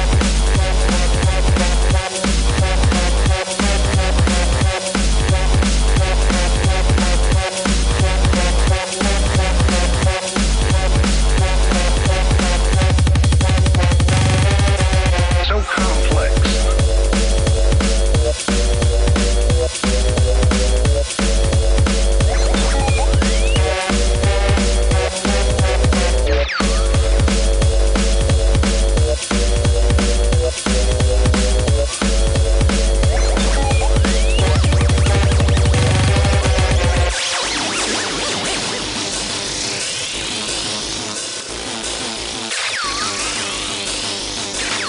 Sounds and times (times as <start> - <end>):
Drum and bass: 0.0 - 44.8
Dubstep: 0.0 - 44.8.